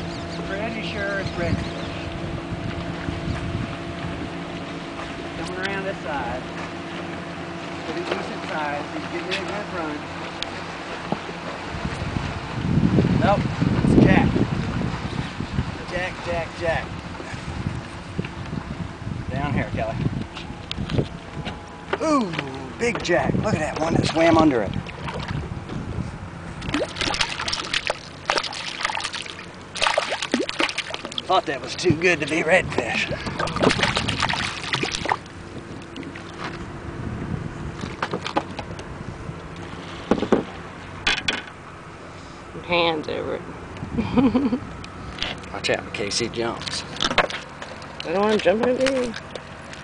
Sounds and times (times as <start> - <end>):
Wind: 0.0 - 49.8.